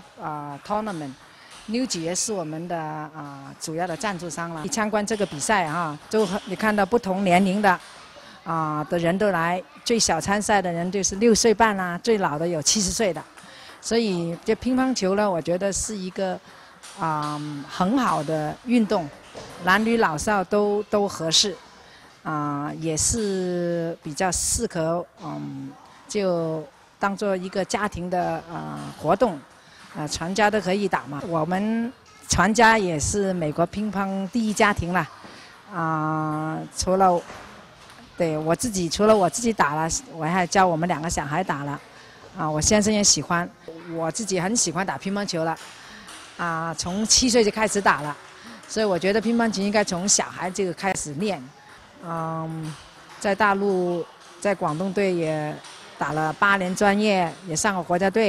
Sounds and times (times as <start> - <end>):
Speech: 0.1 - 7.8, 8.4 - 13.2, 13.8 - 16.4, 17.0 - 21.6, 22.3 - 29.4, 30.0 - 35.1, 35.7 - 37.2, 38.1 - 41.8, 42.4 - 45.6, 46.4 - 58.2.